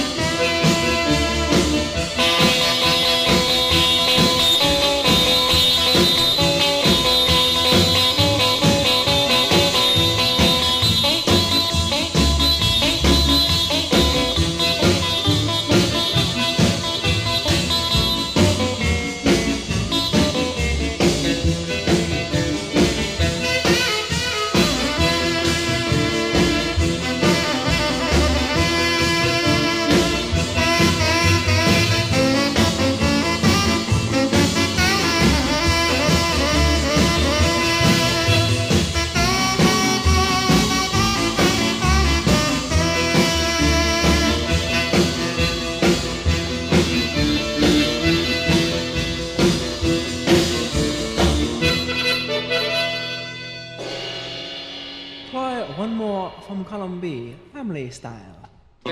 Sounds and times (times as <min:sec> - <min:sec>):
Heavy metal: 0:00.0 - 0:52.6, 0:53.7 - 0:57.1.